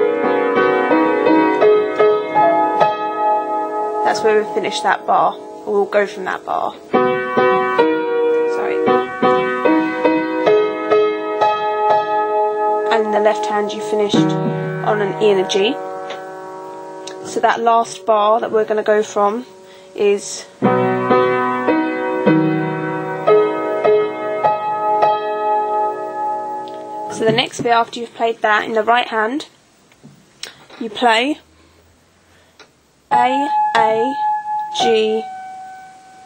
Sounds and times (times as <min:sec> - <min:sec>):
Music: 0:00.0 - 0:27.7, 0:33.1 - 0:36.2
Speech: 0:04.1 - 0:06.8, 0:08.5 - 0:08.9, 0:12.9 - 0:15.8, 0:17.2 - 0:20.5, 0:27.1 - 0:29.6, 0:30.8 - 0:31.4, 0:33.1 - 0:34.2, 0:34.8 - 0:35.3.